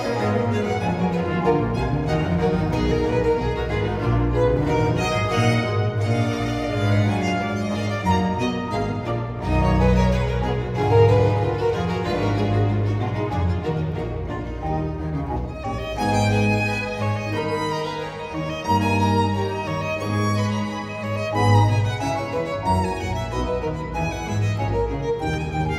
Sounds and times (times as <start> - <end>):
Violin, fiddle: 0.0 - 25.7.